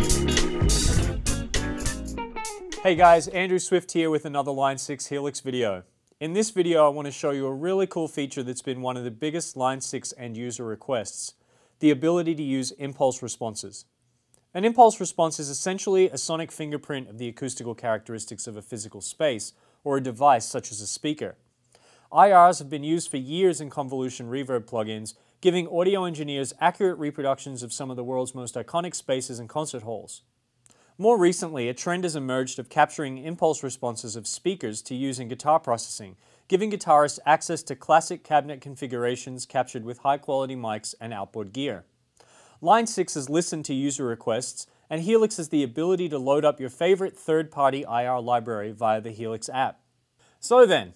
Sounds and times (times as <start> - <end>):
Speech: 2.8 - 13.9, 14.5 - 21.4, 22.1 - 30.3, 31.0 - 41.9, 42.6 - 49.8, 50.4 - 50.9.